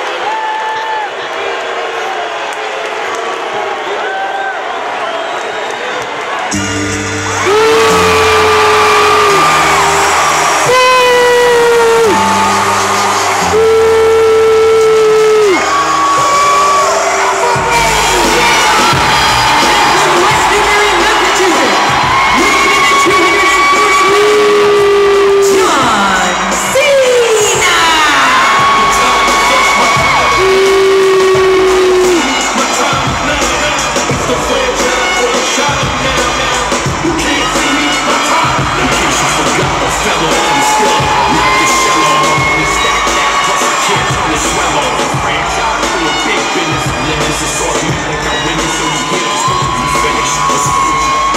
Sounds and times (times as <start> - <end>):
Cheering: 0.0 - 51.3
Music: 6.4 - 51.3.